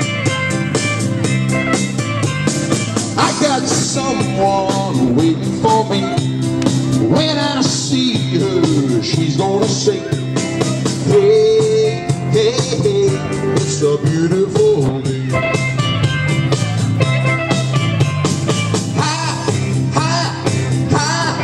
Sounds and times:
Funk: 0.0s - 21.4s
Music of Latin America: 0.0s - 21.4s
Rhythm and blues: 0.0s - 21.4s
Ska: 0.0s - 21.4s
Soul music: 0.0s - 21.4s.

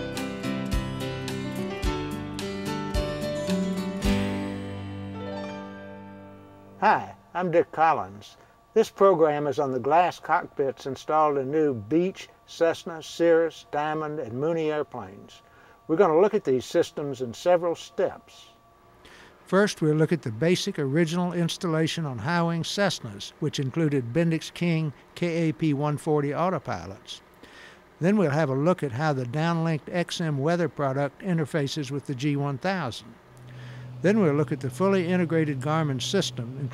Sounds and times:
Speech: 6.8s - 18.6s, 19.5s - 27.2s, 28.0s - 33.1s, 34.0s - 36.7s.

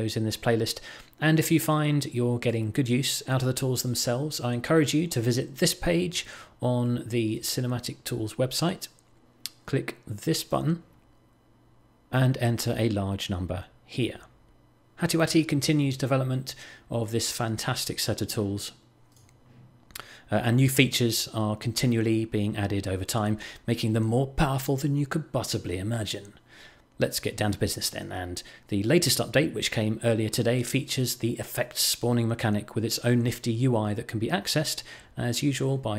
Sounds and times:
Speech: 0.0s - 10.9s, 12.1s - 14.4s, 15.0s - 18.8s, 20.3s - 26.4s, 27.0s - 35.9s.

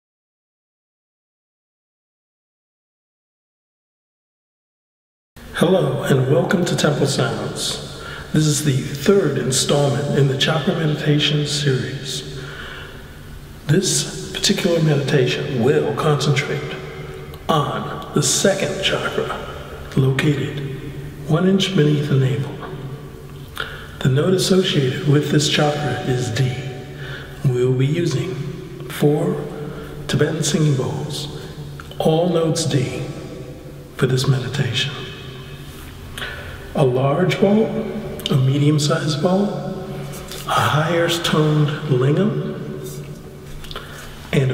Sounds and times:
Speech: 5.5s - 12.4s, 13.7s - 23.0s, 23.6s - 33.4s, 34.0s - 35.4s, 36.8s - 43.2s, 44.3s - 44.5s.

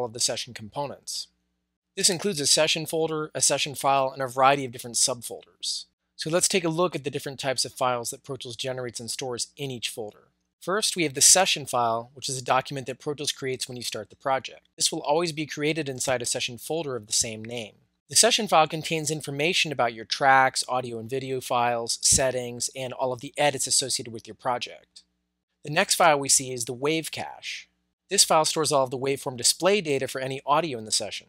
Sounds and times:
Speech: 0.0s - 1.3s, 2.0s - 25.0s, 25.7s - 31.2s.

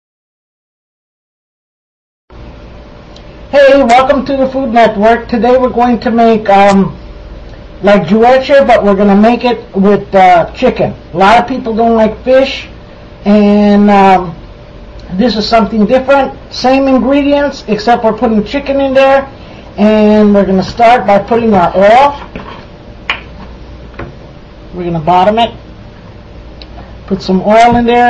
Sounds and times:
Speech: 3.5s - 7.0s, 7.8s - 14.4s, 15.0s - 22.3s, 24.7s - 25.6s, 27.1s - 28.1s.

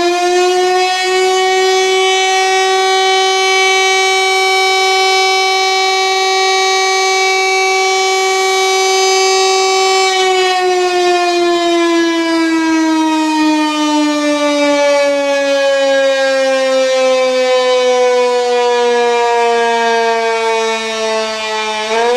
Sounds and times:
Siren: 0.0s - 22.1s.

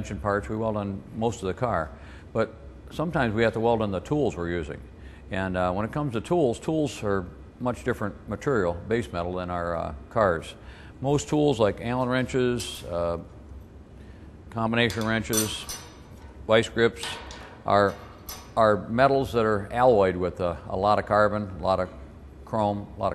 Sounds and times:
Speech: 0.0s - 13.3s, 14.5s - 15.7s, 16.5s - 18.0s, 18.6s - 23.1s.

